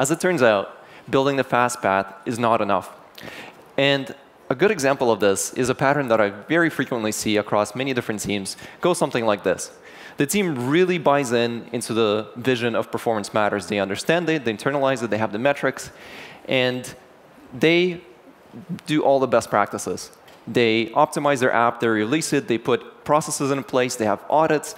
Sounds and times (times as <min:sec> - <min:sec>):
Speech: 0:00.0 - 0:03.0, 0:03.8 - 0:24.7.